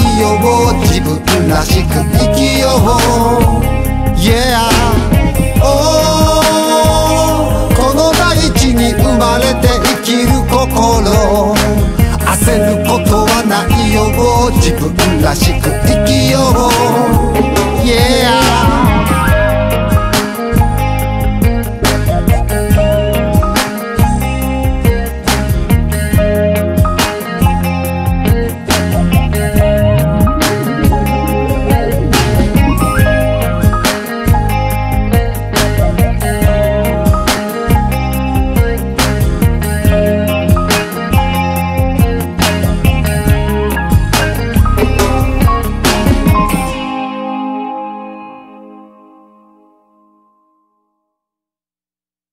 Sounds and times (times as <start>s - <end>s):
Music: 0.0s - 51.5s.